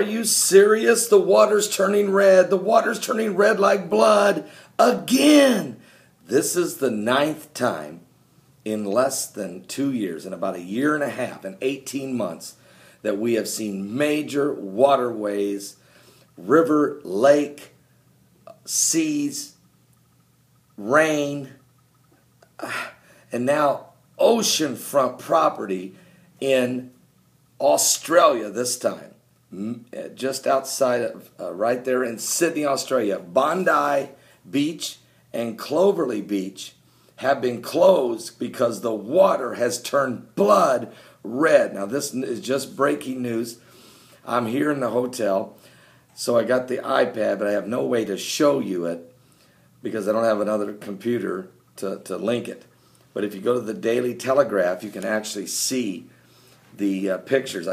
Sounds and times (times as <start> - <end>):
Speech: 0.0 - 15.8, 16.4 - 17.8, 18.5 - 19.6, 20.8 - 21.6, 22.6 - 27.0, 27.6 - 43.6, 44.2 - 45.6, 46.2 - 49.2, 49.8 - 56.1, 56.7 - 57.7.